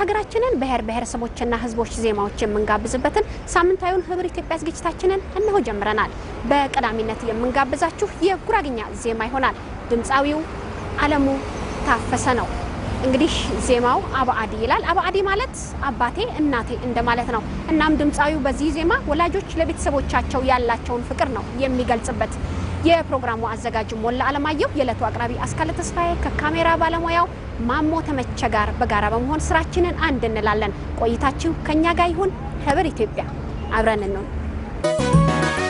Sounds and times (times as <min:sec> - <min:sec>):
Speech: 0:00.0 - 0:34.3.